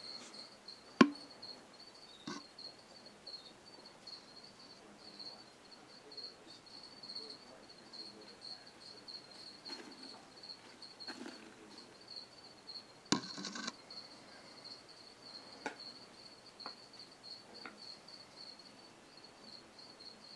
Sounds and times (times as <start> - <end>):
Cricket: 0.0 - 20.3.